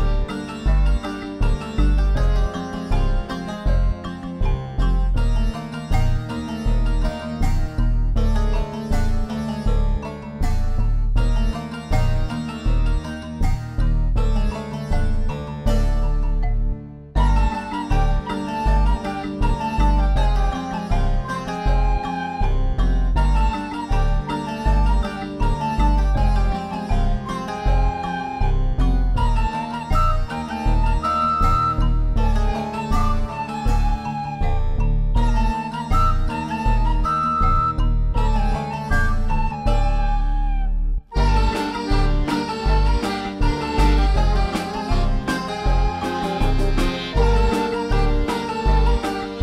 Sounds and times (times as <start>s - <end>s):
Harpsichord: 0.0s - 40.5s, 41.1s - 49.4s.